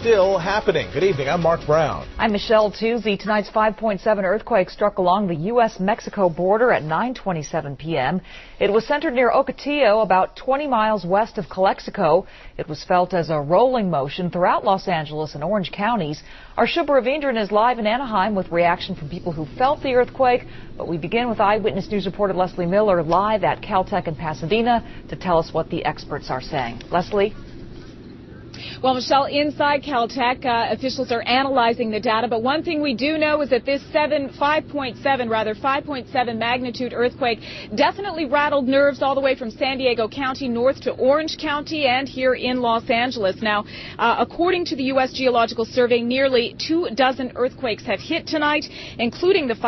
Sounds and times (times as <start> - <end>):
Speech: 0.0 - 27.4.